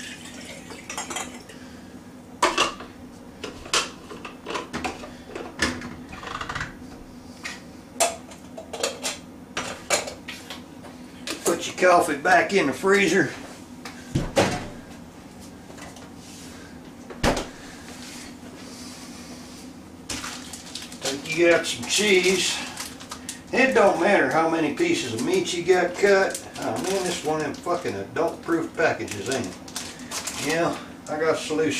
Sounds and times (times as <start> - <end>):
Speech: 11.4 - 13.4, 21.0 - 22.7, 23.5 - 29.6, 30.4 - 31.8.